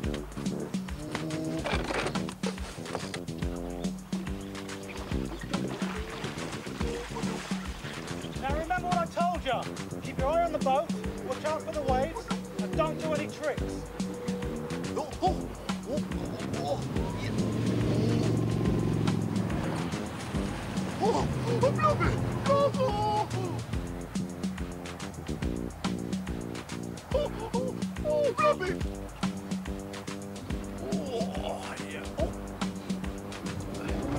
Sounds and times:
Music: 0.0 - 34.1
Speech: 8.4 - 13.8, 21.0 - 23.6, 28.0 - 28.8, 30.8 - 32.3.

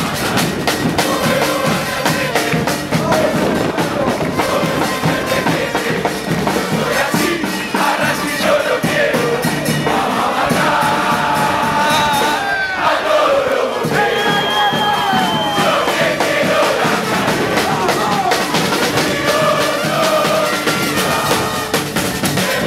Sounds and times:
Crowd: 0.0 - 22.6
Music: 0.0 - 22.6
Outside, urban or manmade: 0.0 - 22.6.

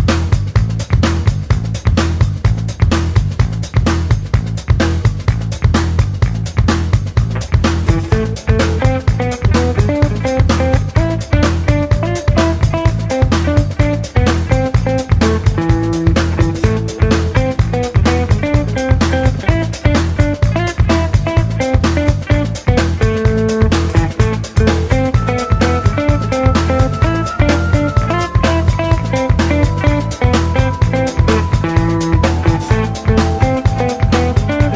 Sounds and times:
Music: 0.0 - 34.7.

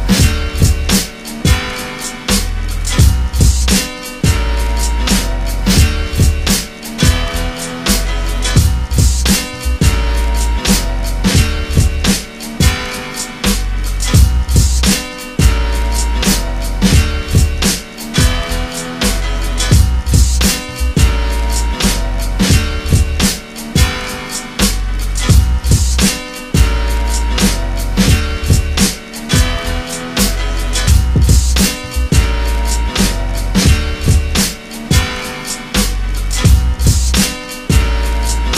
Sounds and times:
Music: 0.0 - 38.5.

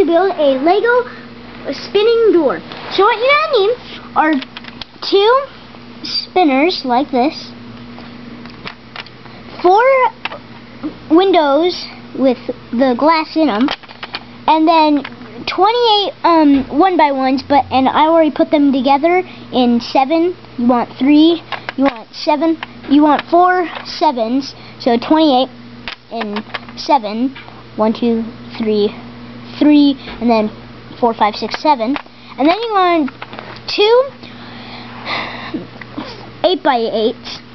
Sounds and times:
Speech: 0.0 - 7.6, 9.6 - 10.2, 11.1 - 13.7, 14.5 - 25.5, 26.1 - 29.0, 29.6 - 33.1, 33.7 - 34.2, 36.4 - 37.5.

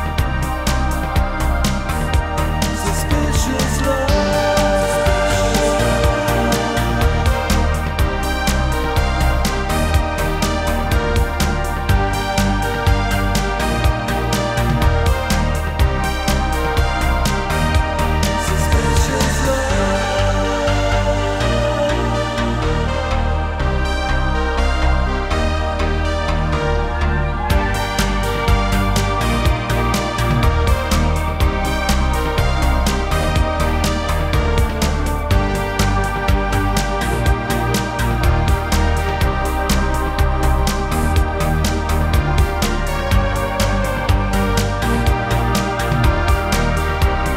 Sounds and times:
Background music: 0.0 - 47.3.

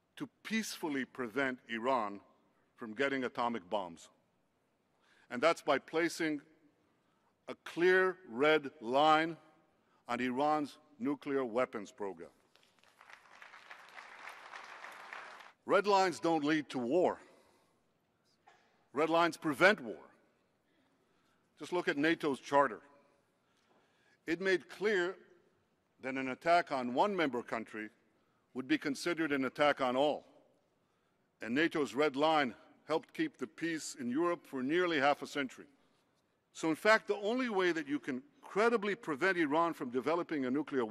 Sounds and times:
Speech: 0.2 - 4.2, 5.3 - 6.5, 7.5 - 9.5, 10.1 - 12.4, 15.7 - 17.3, 18.9 - 20.1, 21.6 - 22.8, 24.3 - 25.2, 26.0 - 28.0, 28.6 - 30.4, 31.4 - 35.7, 36.5 - 40.9.

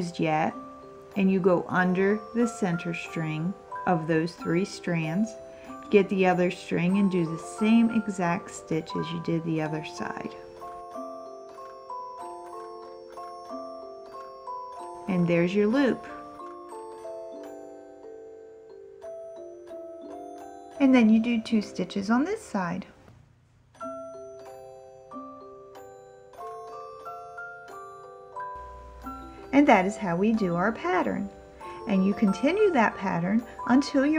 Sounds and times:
Marimba, xylophone: 0.0 - 21.9, 23.8 - 34.1
Glockenspiel: 0.0 - 22.5, 23.7 - 34.1.

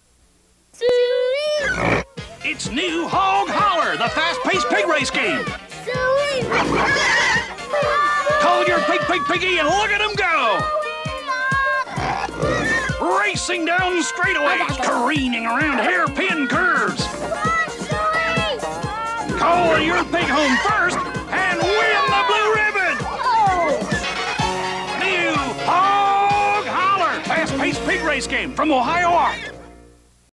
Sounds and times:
Music: 1.6 - 30.2
Speech: 19.0 - 23.8.

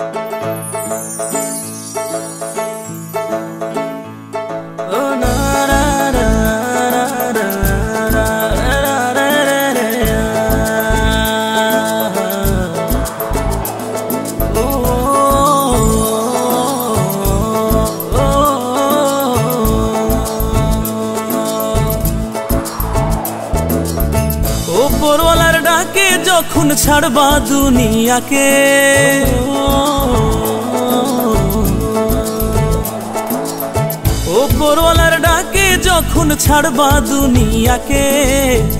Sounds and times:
Music: 0.0 - 38.7.

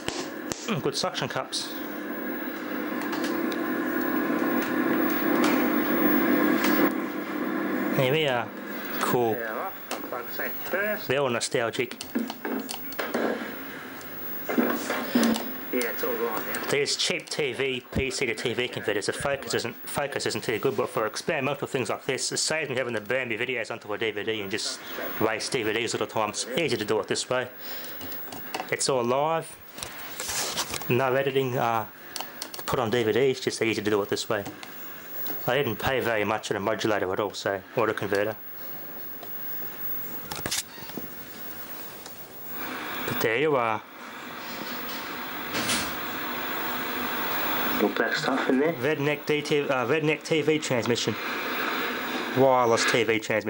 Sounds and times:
Speech: 0.7 - 1.7, 8.0 - 12.0, 15.7 - 27.5, 28.7 - 29.6, 30.9 - 31.9, 32.7 - 34.5, 35.4 - 38.4, 43.2 - 43.8, 47.8 - 51.2, 52.4 - 53.4.

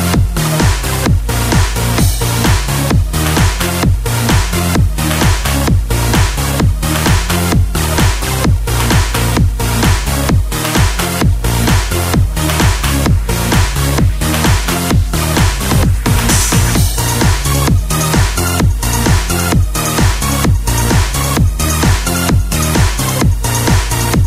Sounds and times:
Sampler: 8.8 - 20.2.

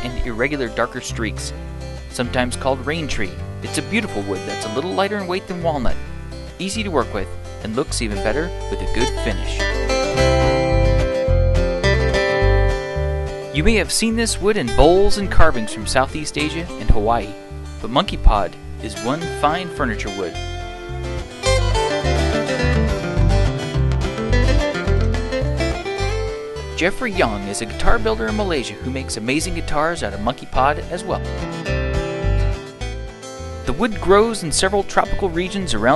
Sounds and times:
Speech: 0.0 - 6.0, 6.6 - 9.8, 13.6 - 20.4, 26.8 - 31.3, 33.7 - 35.9
Music: 0.0 - 35.9.

